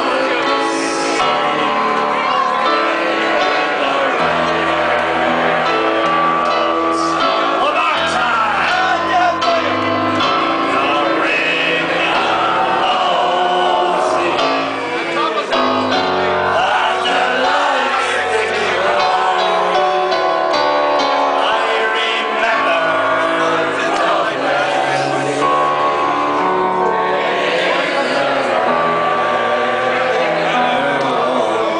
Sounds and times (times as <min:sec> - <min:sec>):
Male singing: 0:00.0 - 0:04.9, 0:10.4 - 0:15.6, 0:16.4 - 0:20.3, 0:21.3 - 0:25.7, 0:27.9 - 0:31.7
Music: 0:00.0 - 0:31.7.